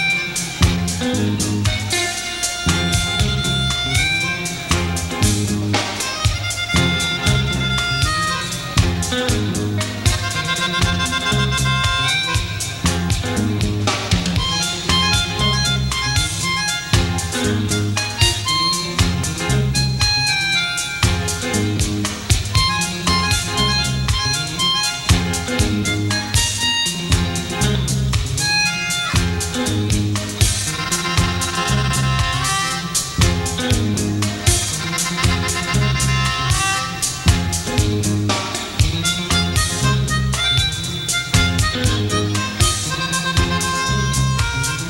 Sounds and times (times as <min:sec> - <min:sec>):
Music: 0:00.0 - 0:44.9.